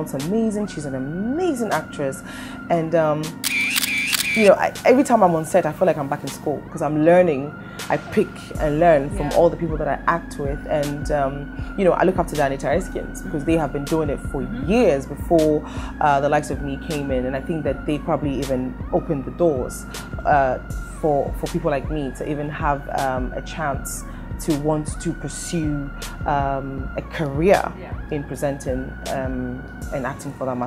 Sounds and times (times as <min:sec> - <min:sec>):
Speech: 0:00.0 - 0:03.4, 0:04.4 - 0:30.6
Music: 0:00.0 - 0:30.6.